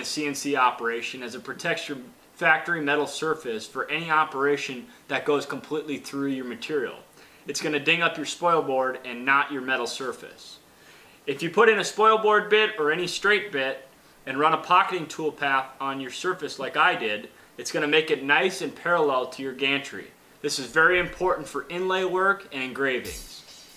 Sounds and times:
Speech: 0.0s - 10.6s, 11.3s - 23.5s.

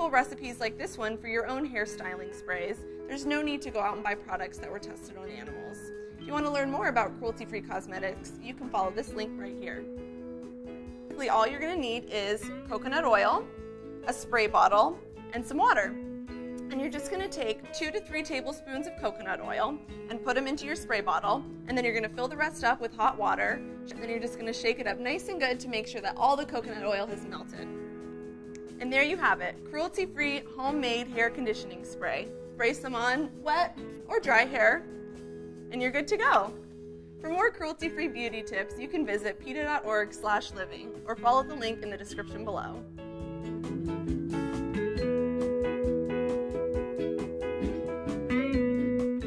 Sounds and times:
Speech: 0.0s - 9.8s, 11.2s - 13.4s, 14.1s - 15.9s, 16.7s - 27.7s, 28.8s - 34.8s, 35.7s - 36.6s, 37.2s - 42.8s
Music: 0.0s - 49.2s.

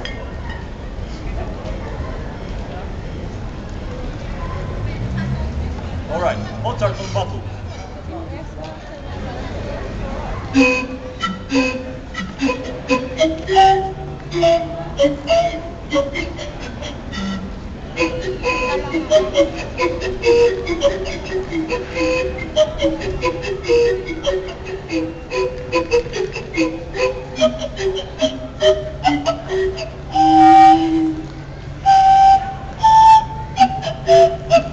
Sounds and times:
Music: 10.5s - 34.7s.

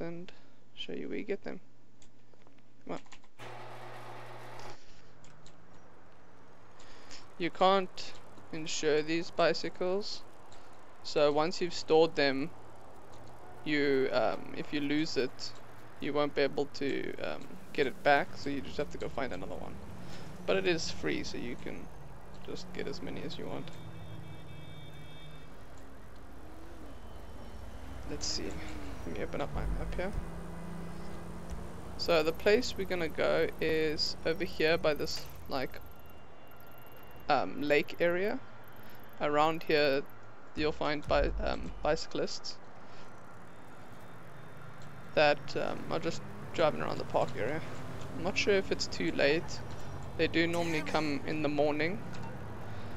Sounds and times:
Speech: 0.0s - 1.6s, 7.4s - 10.2s, 11.1s - 12.5s, 13.7s - 19.8s, 20.5s - 21.8s, 22.5s - 23.7s, 28.1s - 30.2s, 32.0s - 35.8s, 37.3s - 38.4s, 39.2s - 42.6s, 45.2s - 49.6s, 50.2s - 52.0s
Bicycle: 3.2s - 11.1s, 12.0s - 37.9s, 38.5s - 39.2s, 42.6s - 52.9s.

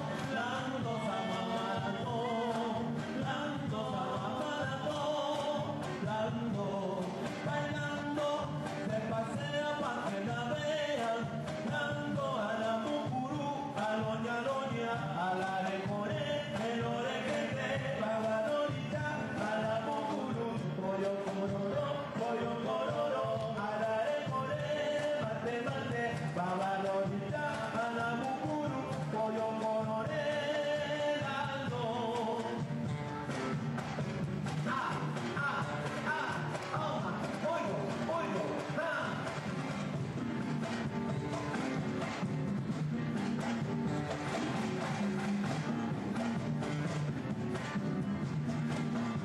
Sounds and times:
Blues: 0.0s - 49.2s.

